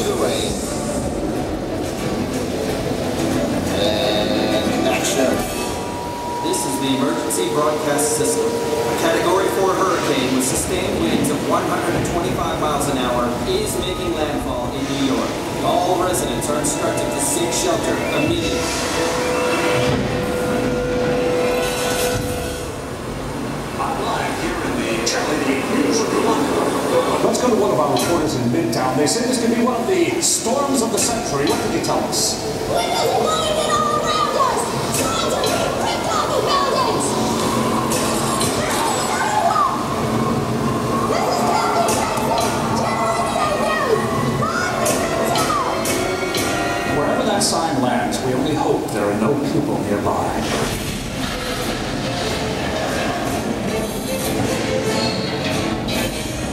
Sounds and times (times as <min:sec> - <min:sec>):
Music: 0:00.0 - 0:07.5, 0:15.4 - 0:23.0, 0:30.0 - 0:48.7, 0:50.4 - 0:56.5
Speech: 0:03.7 - 0:05.6, 0:06.3 - 0:18.7, 0:23.8 - 0:37.2, 0:46.9 - 0:50.8.